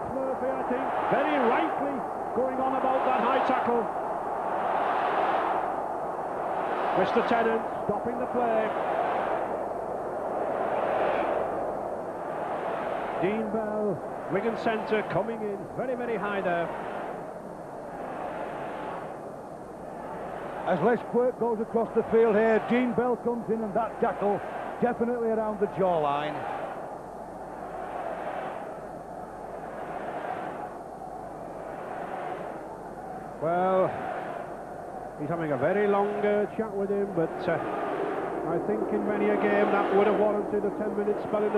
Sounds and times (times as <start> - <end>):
Speech: 0.0 - 3.9, 7.0 - 8.7, 13.2 - 16.7, 20.7 - 26.4, 33.4 - 34.0, 35.2 - 37.6, 38.5 - 41.5.